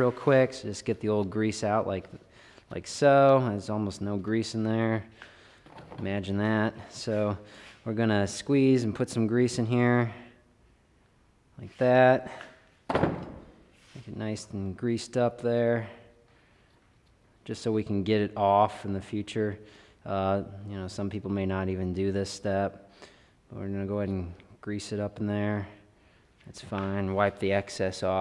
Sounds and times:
Speech: 0.0 - 5.1, 6.0 - 10.3, 11.6 - 12.4, 14.0 - 16.0, 17.4 - 22.8, 23.5 - 25.8, 26.5 - 28.2.

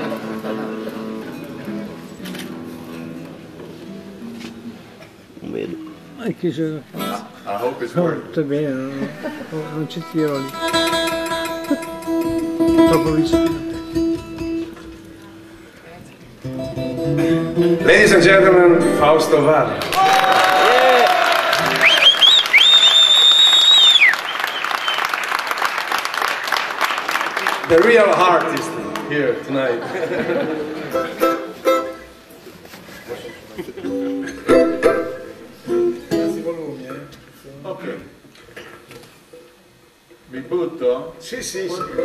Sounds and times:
Music: 0.0 - 7.9, 9.5 - 19.9, 21.6 - 22.2, 27.7 - 32.5, 33.8 - 36.7.

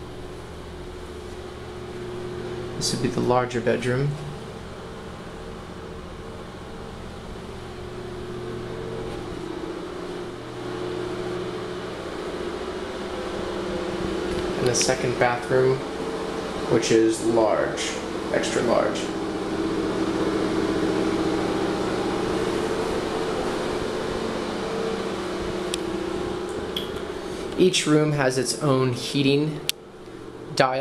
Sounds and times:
Speech: 2.8 - 4.4, 14.6 - 15.9, 16.7 - 19.2, 27.6 - 29.7, 30.5 - 30.8.

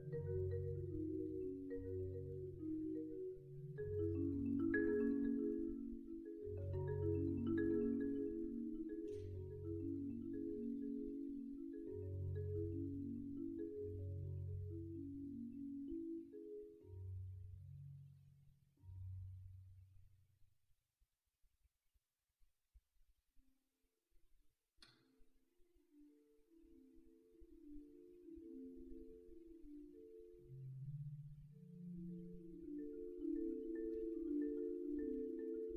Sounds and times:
Marimba, xylophone: 0.0 - 18.0, 25.9 - 35.7
Vibraphone: 0.0 - 18.1, 25.9 - 35.7.

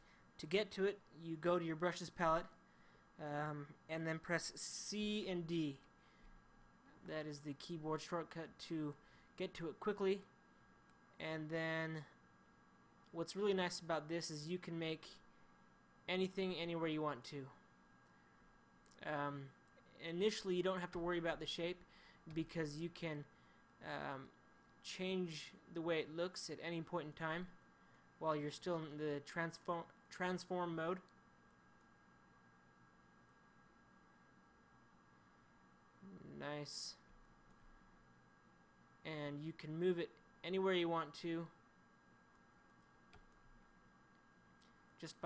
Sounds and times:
Speech: 0.4 - 2.6, 3.2 - 5.9, 7.0 - 10.4, 11.2 - 12.2, 13.1 - 15.2, 16.1 - 17.6, 19.0 - 27.6, 28.2 - 31.1, 36.0 - 37.1, 39.0 - 41.6, 45.0 - 45.2.

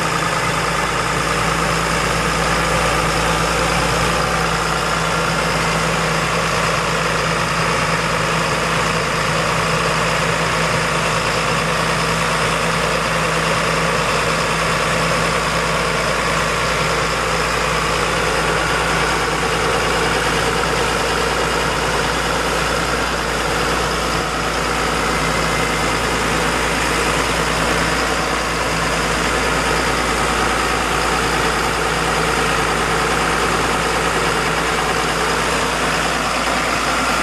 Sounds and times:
Vehicle: 0.0 - 37.2.

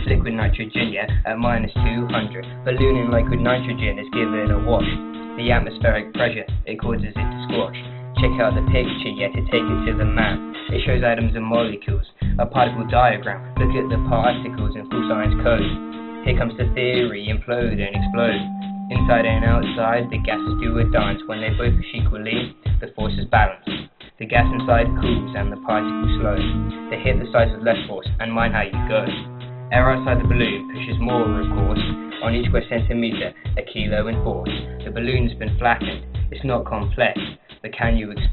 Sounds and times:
Music: 0.0 - 38.3.

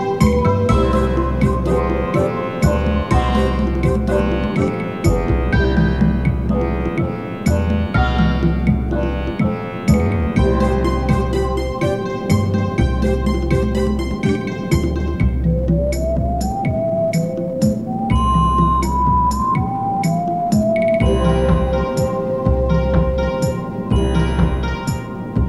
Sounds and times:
Video game music: 0.0 - 25.4.

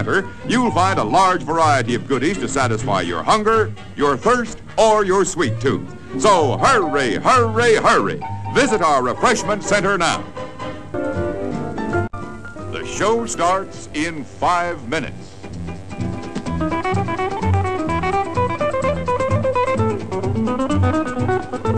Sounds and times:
Speech: 0.0 - 10.2, 12.8 - 15.3
Music: 0.0 - 21.7.

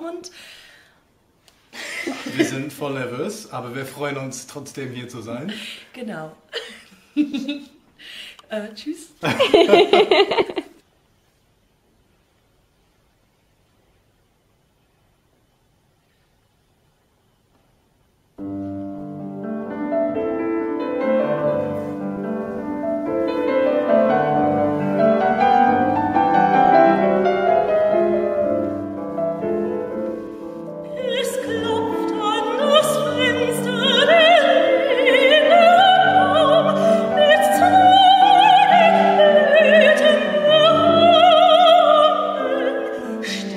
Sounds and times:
Speech: 8.5 - 9.2
Snicker: 9.2 - 10.8.

